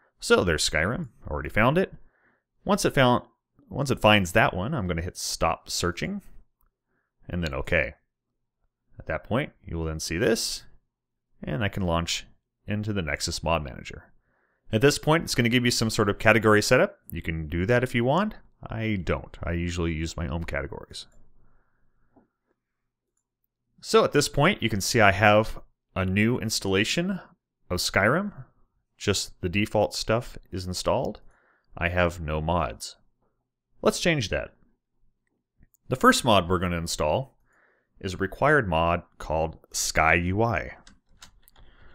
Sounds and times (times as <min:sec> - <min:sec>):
Inside, small room: 0:00.0 - 0:41.9
Speech: 0:00.2 - 0:06.5, 0:07.3 - 0:08.1, 0:08.9 - 0:10.8, 0:11.4 - 0:21.2, 0:23.8 - 0:33.1, 0:33.8 - 0:34.6, 0:35.8 - 0:37.4, 0:38.0 - 0:40.9.